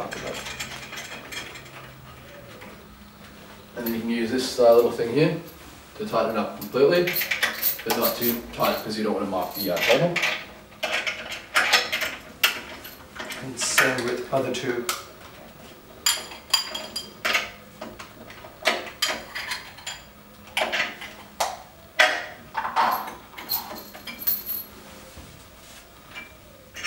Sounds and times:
Speech: 3.8 - 7.2, 7.8 - 10.2, 13.4 - 15.0.

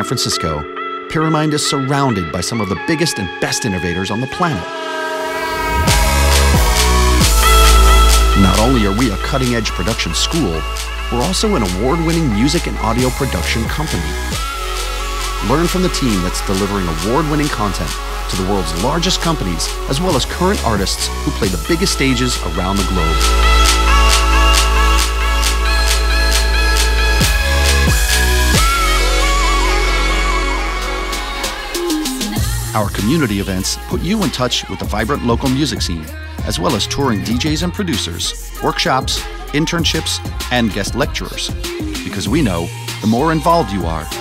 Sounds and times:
Speech: 0.0 - 4.7, 8.4 - 14.4, 15.4 - 23.3, 32.4 - 44.2
Music: 0.0 - 44.2.

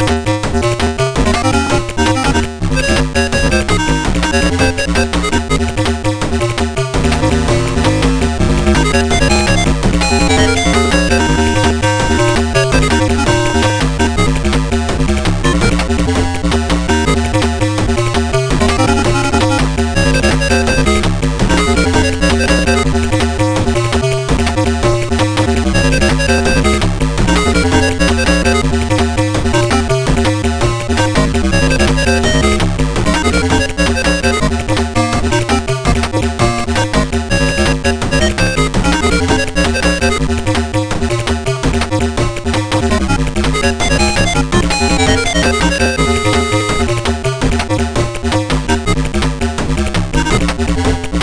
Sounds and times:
Background music: 0.0 - 51.2.

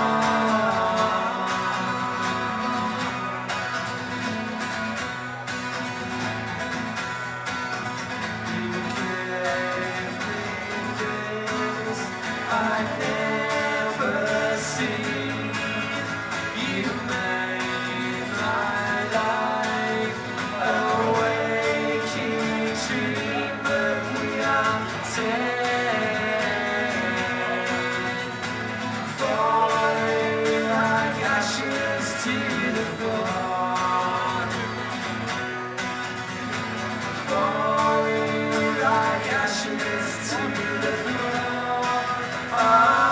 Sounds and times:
Music: 0.0 - 43.1.

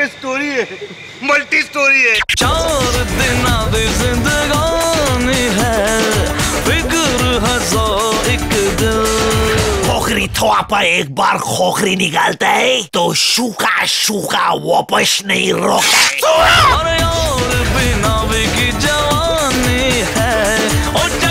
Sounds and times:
Speech: 0.0 - 2.2, 9.8 - 16.9
Music: 2.4 - 10.5, 16.4 - 21.3.

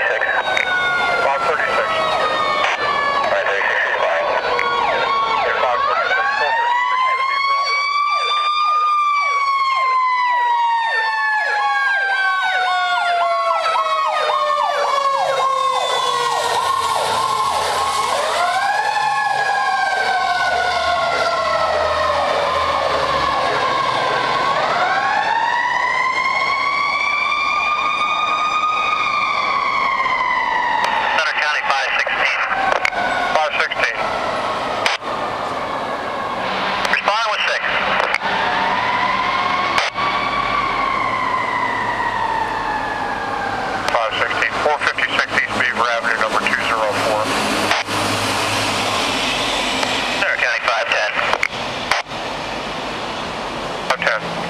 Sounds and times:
Fire engine, fire truck (siren): 0.0 - 54.4.

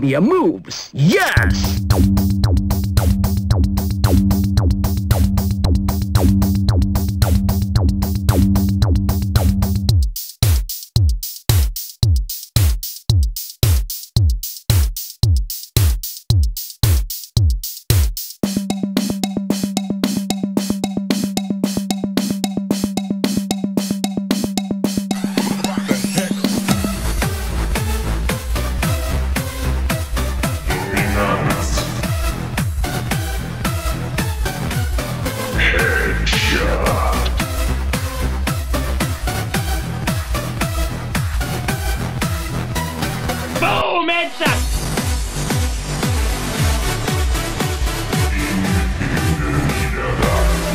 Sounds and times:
Speech: 0.0 - 1.8, 30.7 - 32.1, 35.6 - 37.4, 43.6 - 44.6, 48.3 - 50.7
Music: 1.4 - 50.7.

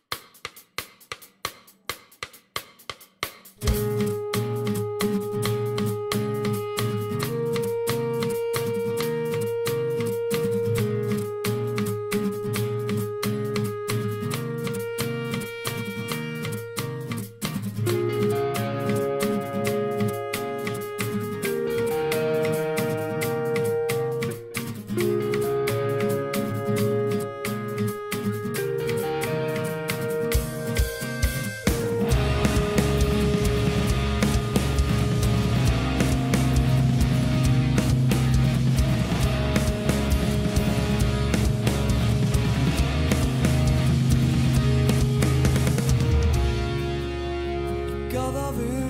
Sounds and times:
Rhythm and blues: 0.0 - 48.8.

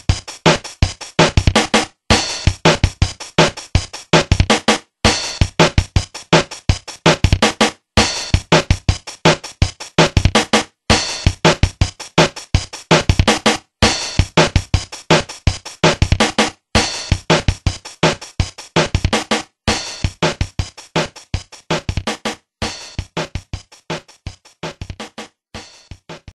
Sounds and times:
Music: 0.0 - 26.3.

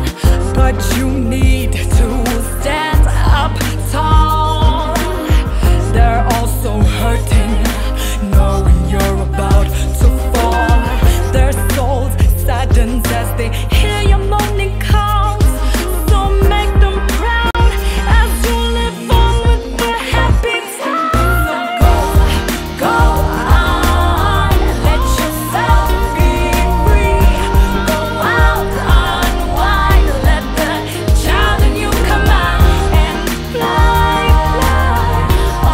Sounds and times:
Music: 0.0 - 35.7
Singing: 0.0 - 35.7.

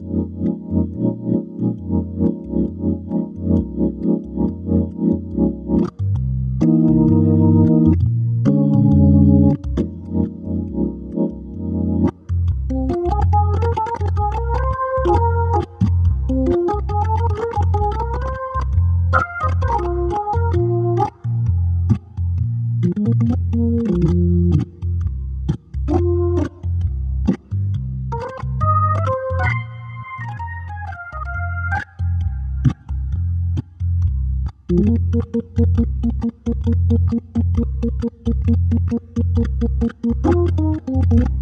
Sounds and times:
Electronic organ: 0.0 - 41.4
Hammond organ: 0.0 - 41.4.

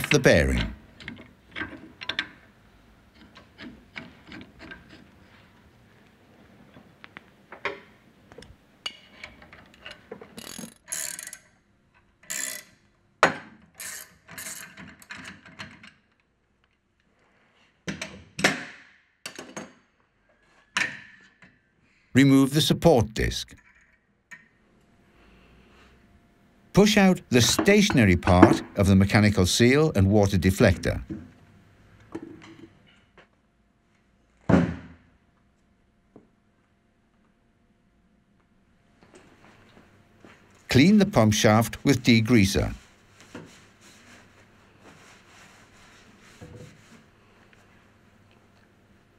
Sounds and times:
Tools: 0.6 - 2.4, 3.1 - 5.1, 8.8 - 16.3, 23.6 - 24.6.

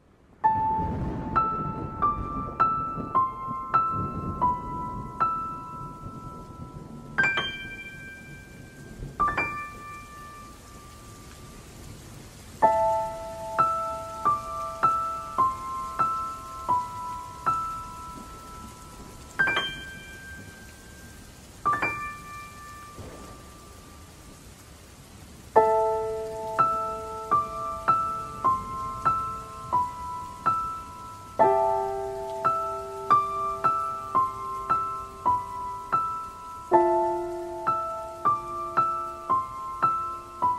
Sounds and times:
Rain on surface: 0.0 - 40.5
Music: 0.4 - 11.6, 12.6 - 24.0, 25.6 - 40.5.

